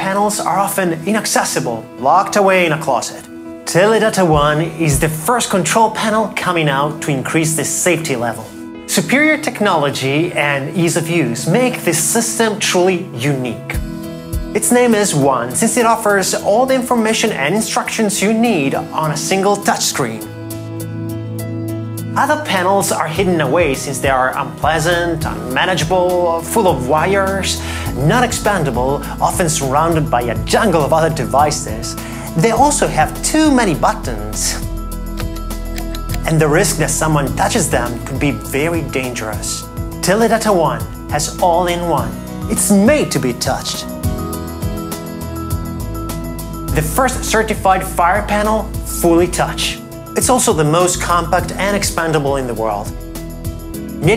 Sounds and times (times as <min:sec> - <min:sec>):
Speech: 0:00.0 - 0:13.8, 0:14.6 - 0:20.3, 0:22.2 - 0:34.7, 0:36.2 - 0:43.9, 0:46.7 - 0:53.0
Music: 0:00.0 - 0:54.1.